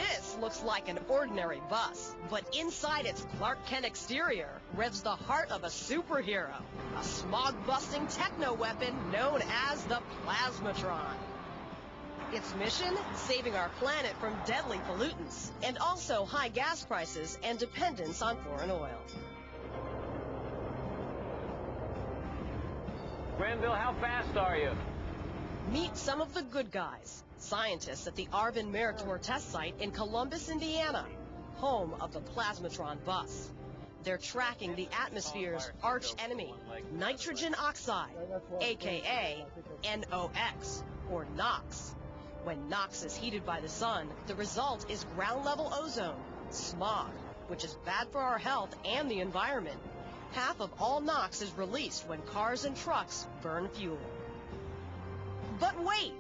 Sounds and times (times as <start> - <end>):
Music: 0.0 - 56.2
Vehicle: 6.4 - 18.6, 19.2 - 38.1, 39.9 - 56.2
Speech: 23.4 - 24.8, 25.7 - 33.4, 34.1 - 41.8.